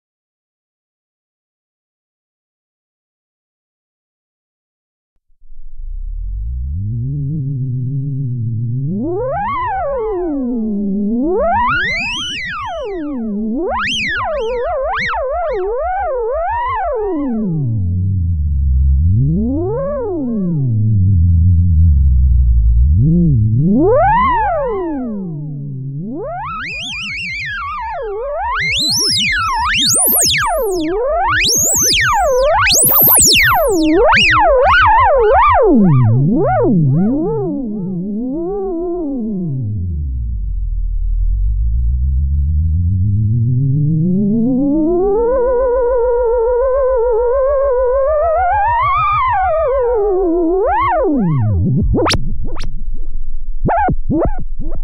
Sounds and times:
Theremin: 5.4s - 54.8s
Synthesizer: 22.8s - 38.0s.

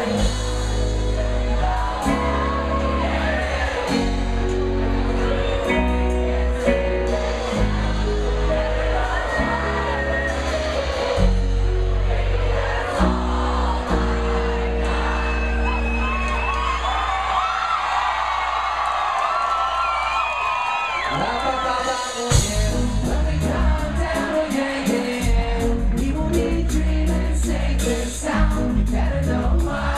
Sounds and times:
Music: 0.0s - 18.4s, 21.1s - 29.9s.

